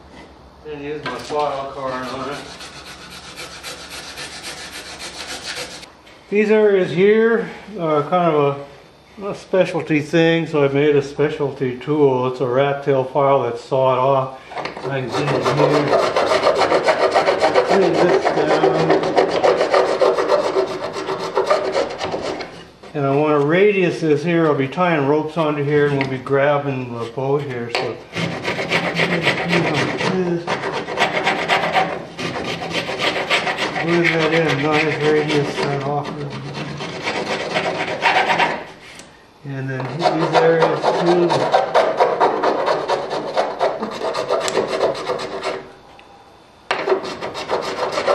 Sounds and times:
Rub: 0:01.7 - 0:05.9, 0:14.7 - 0:23.2, 0:28.1 - 0:39.0, 0:39.9 - 0:45.6, 0:46.8 - 0:48.1
Filing (rasp): 0:01.8 - 0:05.9, 0:14.5 - 0:22.6, 0:28.1 - 0:39.0, 0:39.9 - 0:45.6, 0:46.7 - 0:48.1.

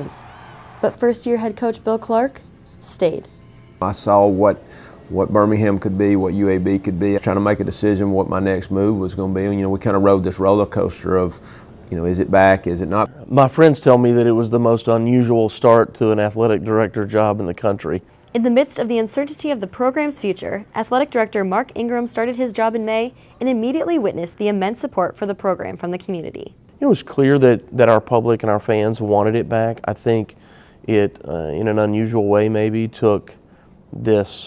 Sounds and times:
Speech: 0:00.8 - 0:30.3, 0:30.9 - 0:33.4, 0:34.0 - 0:34.4.

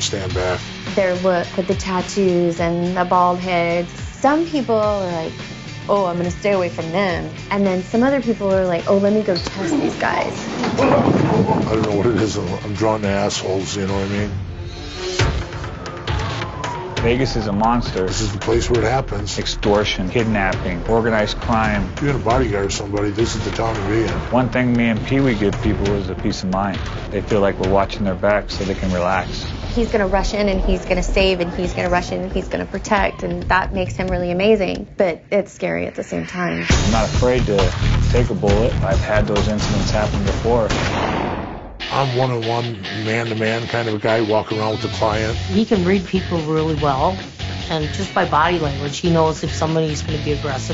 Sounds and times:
Music: 0:00.0 - 0:50.7
Speech: 0:17.0 - 0:40.7, 0:41.9 - 0:50.7.

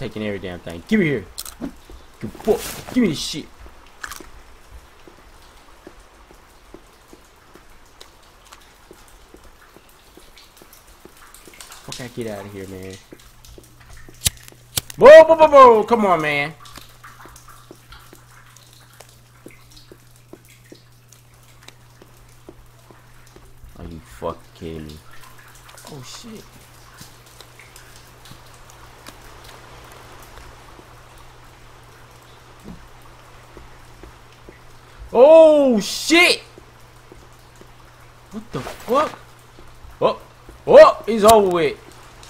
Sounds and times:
Speech: 0:00.0 - 0:01.3, 0:02.2 - 0:03.5, 0:11.9 - 0:13.0, 0:15.0 - 0:16.6, 0:23.8 - 0:25.0, 0:25.8 - 0:26.5, 0:35.1 - 0:36.5, 0:38.4 - 0:39.2, 0:40.0 - 0:41.8.

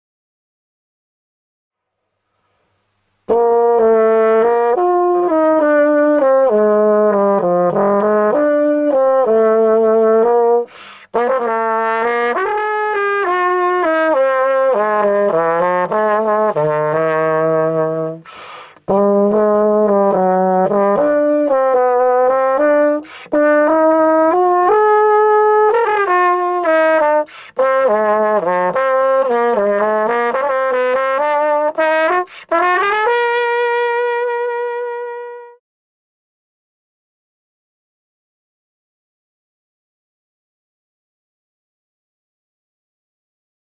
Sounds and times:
Trumpet: 0:03.3 - 0:35.6.

